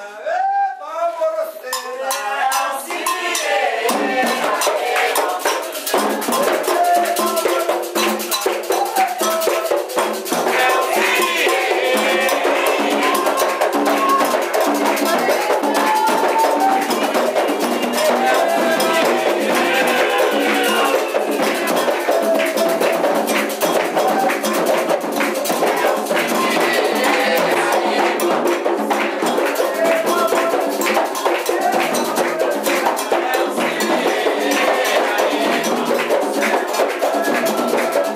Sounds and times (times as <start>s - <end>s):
Music: 1.8s - 38.1s.